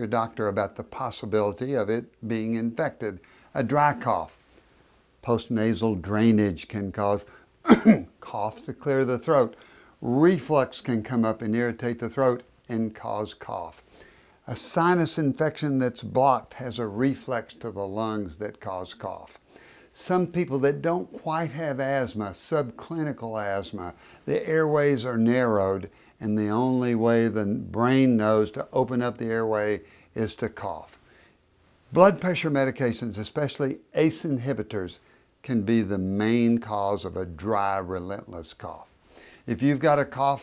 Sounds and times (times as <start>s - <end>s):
Speech: 0.0s - 4.4s, 5.2s - 13.8s, 14.4s - 31.0s, 31.9s - 40.4s.